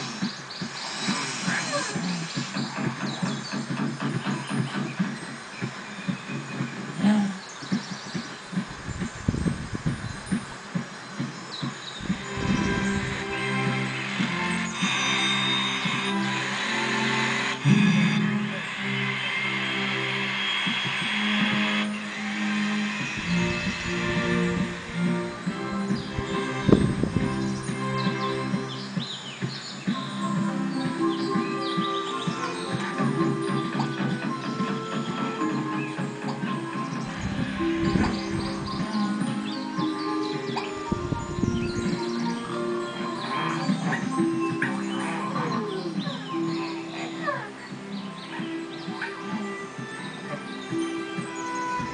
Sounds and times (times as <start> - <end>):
Music: 0.0 - 51.9.